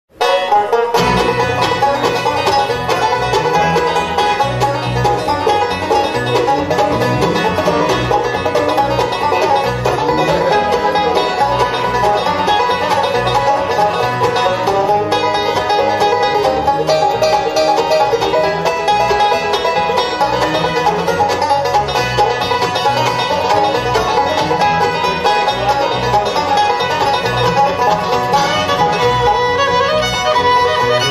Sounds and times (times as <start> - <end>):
Banjo: 0.1 - 31.1
Classical music: 2.7 - 20.4
Orchestra: 2.7 - 21.0.